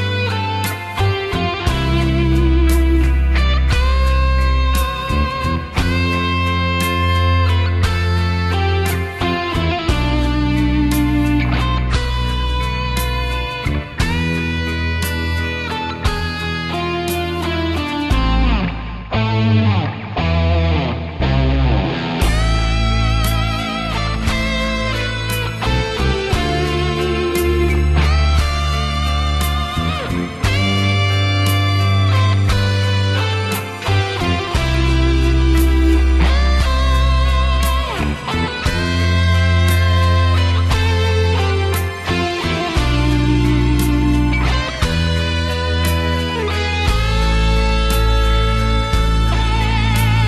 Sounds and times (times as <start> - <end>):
Electric guitar: 0.0 - 50.2.